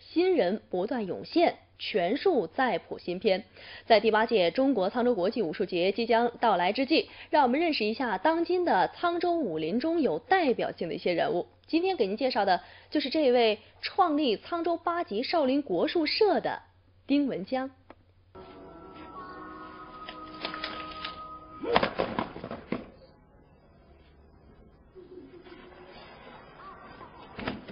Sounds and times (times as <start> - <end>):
Speech: 0.0 - 17.8.